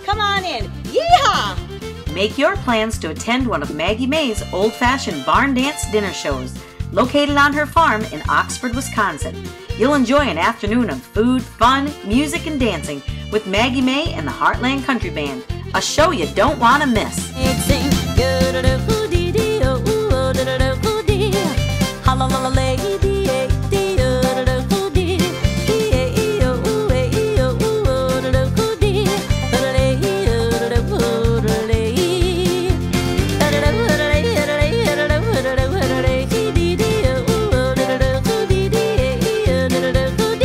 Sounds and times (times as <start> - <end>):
Speech: 0.0 - 18.0
Music: 0.0 - 40.4.